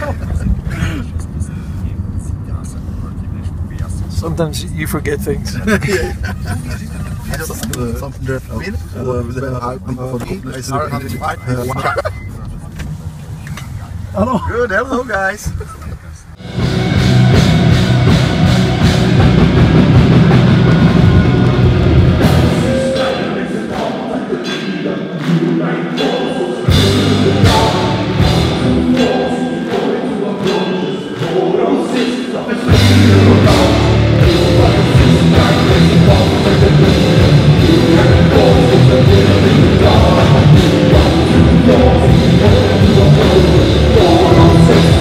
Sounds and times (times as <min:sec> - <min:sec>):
Car: 0:00.0 - 0:23.0
Speech: 0:01.4 - 0:05.7, 0:06.6 - 0:16.4
Music: 0:16.4 - 0:45.0.